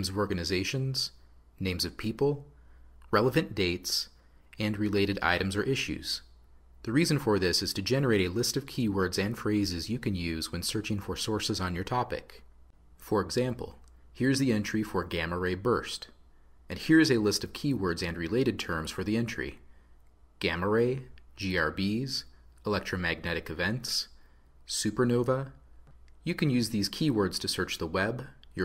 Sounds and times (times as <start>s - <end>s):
Speech: 0.0s - 19.7s, 20.4s - 25.6s, 26.2s - 28.6s.